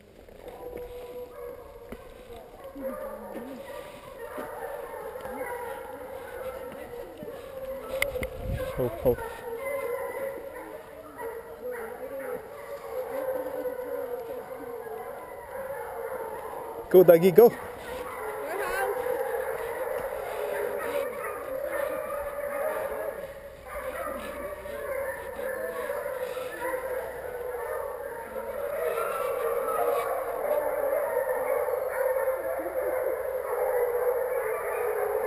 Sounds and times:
Speech: 16.9 - 17.6.

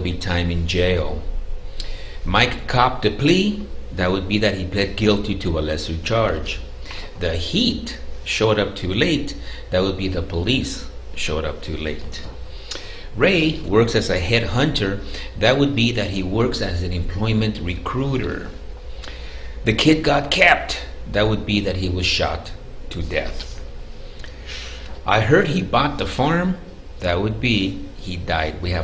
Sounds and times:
Speech: 0.0 - 1.3, 2.2 - 6.6, 7.2 - 12.3, 13.2 - 18.6, 19.6 - 23.6, 25.0 - 28.8
Inside, small room: 0.0 - 28.8.

